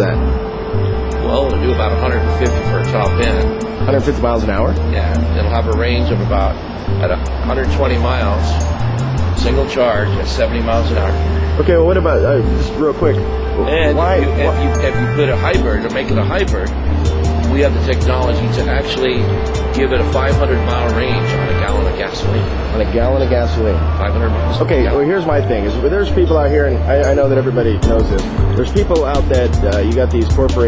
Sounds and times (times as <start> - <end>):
Speech: 0.0 - 0.2, 1.2 - 8.6, 9.4 - 16.7, 17.5 - 30.6
Music: 0.0 - 30.6.